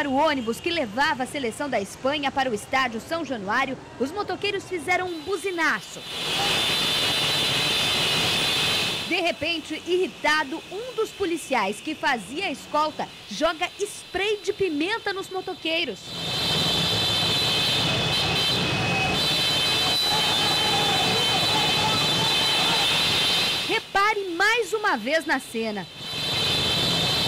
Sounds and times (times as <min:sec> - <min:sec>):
Speech: 0:09.1 - 0:16.0, 0:23.7 - 0:25.9.